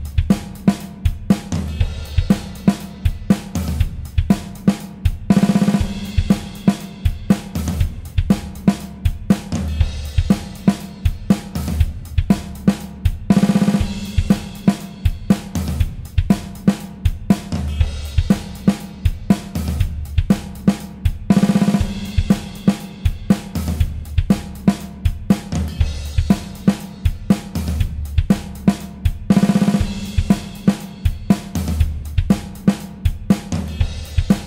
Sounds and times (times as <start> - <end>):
Drum kit: 0.0 - 34.4
Drum roll: 0.0 - 34.4.